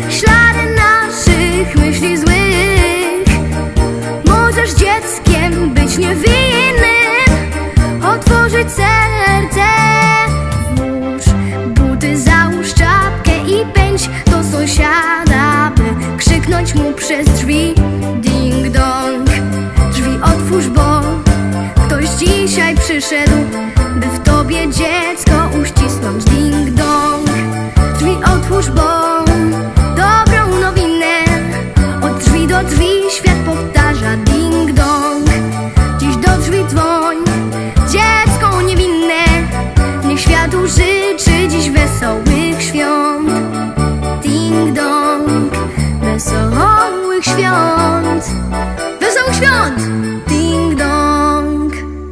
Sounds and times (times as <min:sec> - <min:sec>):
Music: 0:00.0 - 0:52.1.